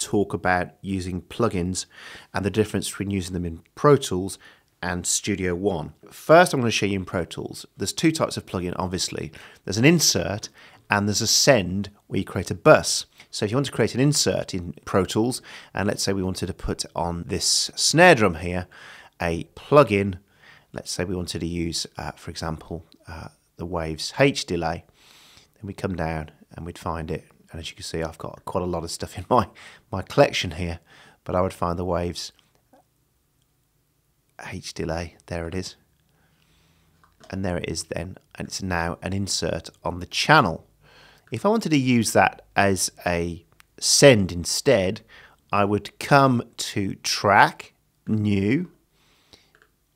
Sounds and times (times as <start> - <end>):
Speech: 0.0 - 24.9, 25.6 - 32.4, 34.4 - 35.9, 37.2 - 40.7, 41.3 - 48.8.